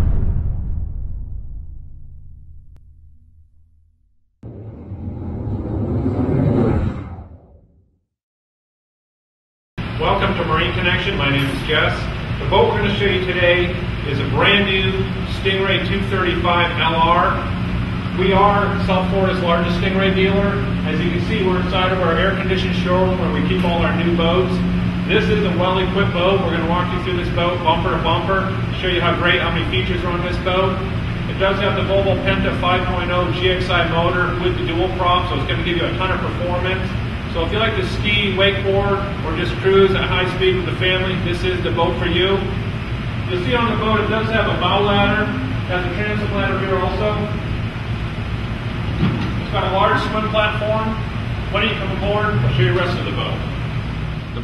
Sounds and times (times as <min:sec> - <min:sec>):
Speech: 0:10.0 - 0:17.5, 0:18.2 - 0:42.6, 0:43.3 - 0:47.4, 0:49.4 - 0:53.5.